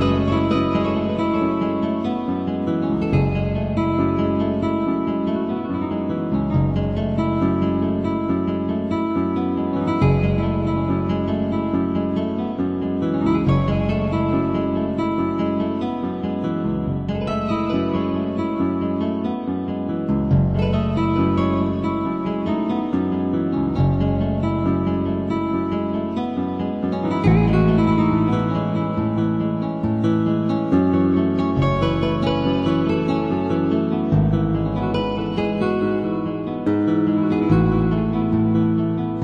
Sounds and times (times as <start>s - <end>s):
Music: 0.0s - 39.2s.